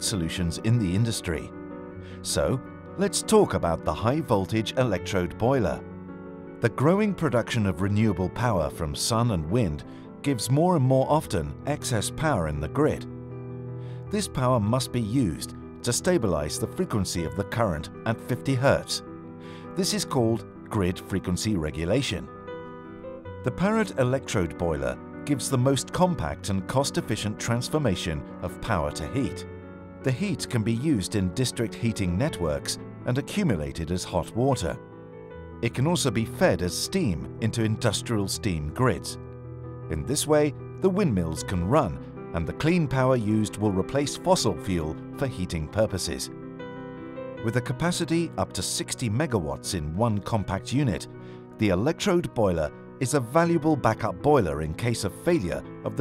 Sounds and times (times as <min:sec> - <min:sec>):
Speech: 0:00.0 - 0:01.5, 0:02.2 - 0:05.8, 0:06.6 - 0:13.1, 0:14.1 - 0:19.0, 0:19.8 - 0:22.3, 0:23.5 - 0:29.4, 0:30.1 - 0:34.8, 0:35.6 - 0:39.2, 0:39.9 - 0:46.3, 0:47.4 - 0:56.0.